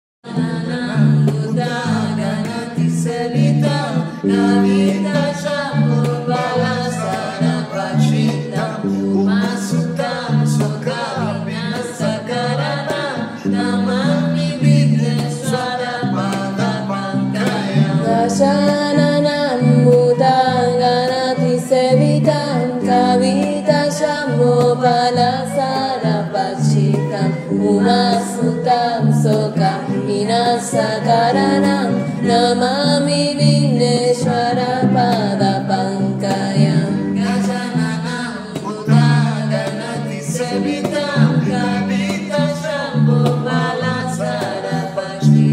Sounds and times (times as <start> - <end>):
Mantra: 0.3 - 45.5.